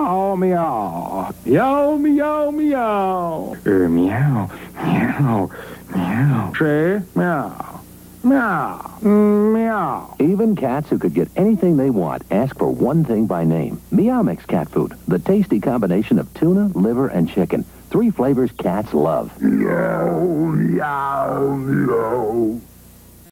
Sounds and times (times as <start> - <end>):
Speech: 0.0 - 22.6.